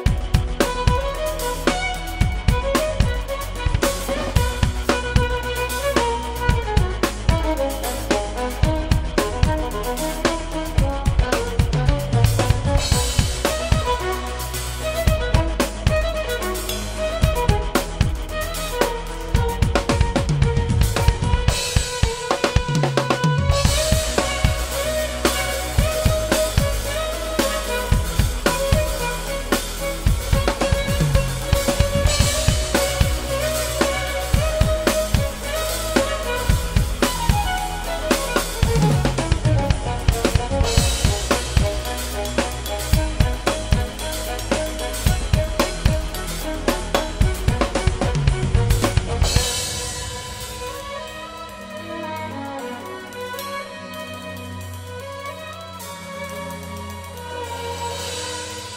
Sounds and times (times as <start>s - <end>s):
Musical instrument: 0.0s - 58.7s.